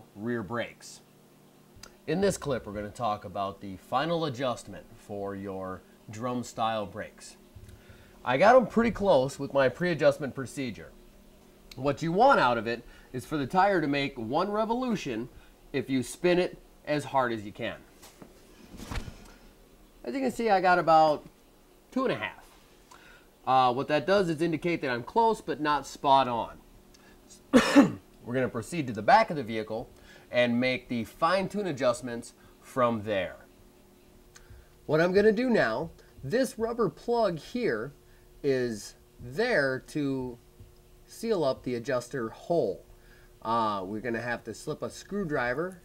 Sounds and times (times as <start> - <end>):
Speech: 0.0 - 1.1, 2.0 - 7.4, 8.2 - 11.0, 11.7 - 17.9, 20.0 - 21.3, 21.9 - 22.5, 23.4 - 26.6, 28.2 - 33.5, 34.9 - 40.4, 41.1 - 45.8.